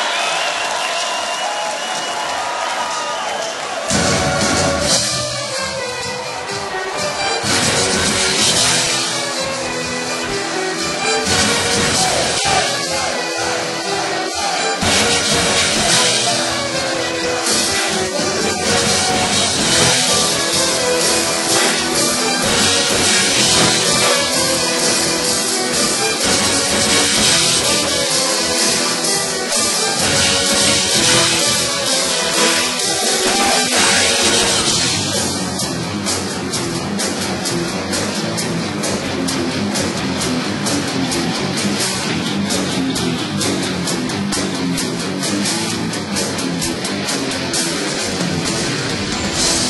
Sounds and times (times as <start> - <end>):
Music: 0.0 - 49.6.